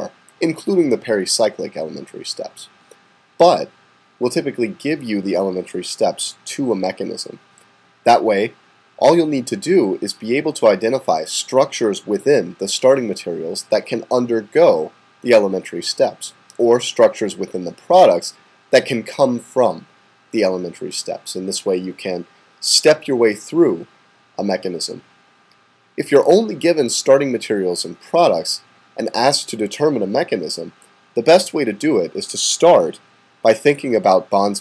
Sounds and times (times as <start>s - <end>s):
Speech: 0.0s - 2.8s, 3.4s - 7.4s, 8.0s - 25.1s, 26.0s - 34.6s.